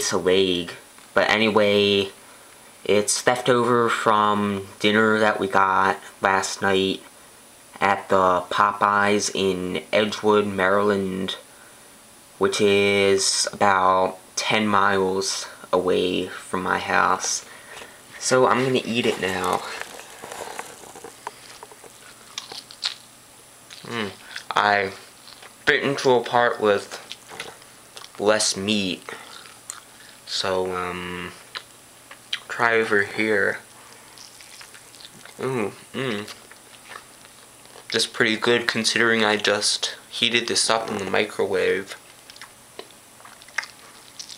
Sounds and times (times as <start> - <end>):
Speech: 0.0 - 2.2, 2.8 - 7.1, 7.8 - 11.5, 12.4 - 17.5, 18.2 - 19.9, 23.8 - 25.0, 25.6 - 27.1, 28.1 - 29.4, 30.3 - 31.5, 32.4 - 33.7, 35.4 - 36.4, 37.9 - 42.0.